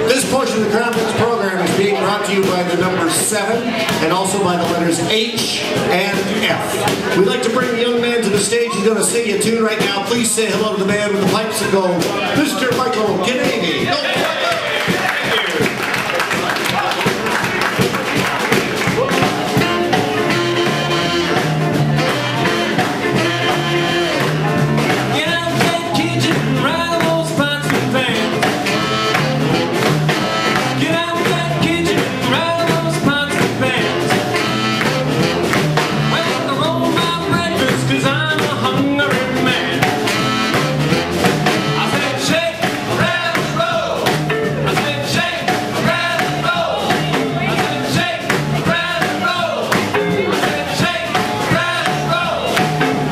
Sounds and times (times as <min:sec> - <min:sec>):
Speech: 0:00.0 - 0:17.2, 0:44.6 - 0:52.5
Music: 0:00.0 - 0:53.1.